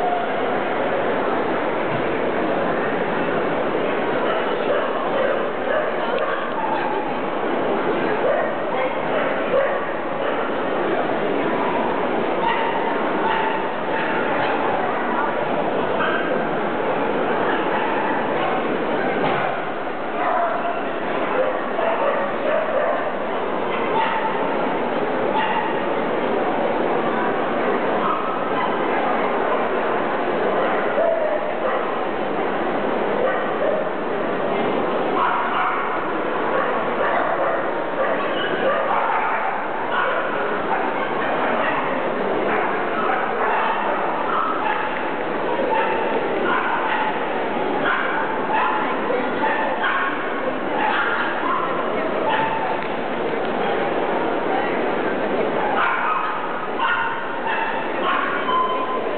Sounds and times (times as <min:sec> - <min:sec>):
Yip: 0:12.4 - 0:14.6, 0:24.0 - 0:24.4, 0:25.4 - 0:25.8, 0:35.2 - 0:35.9, 0:36.6 - 0:41.9, 0:42.5 - 0:45.0, 0:45.7 - 0:47.2, 0:47.8 - 0:50.2, 0:50.8 - 0:52.7, 0:55.8 - 0:59.0.